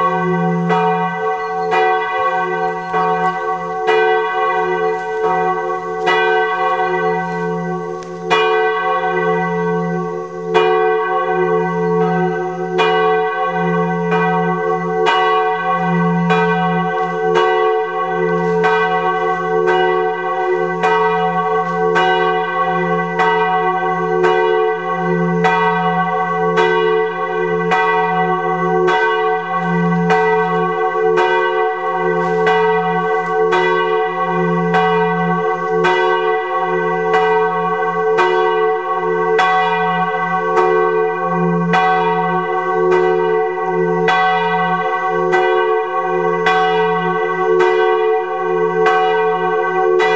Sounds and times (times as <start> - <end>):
Bell: 0.0 - 50.1.